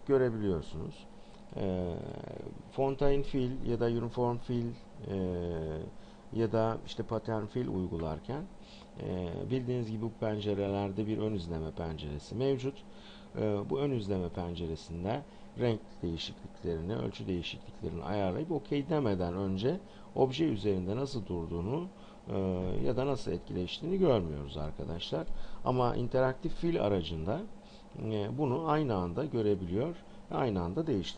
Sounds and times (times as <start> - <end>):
Speech: 0.0 - 31.1.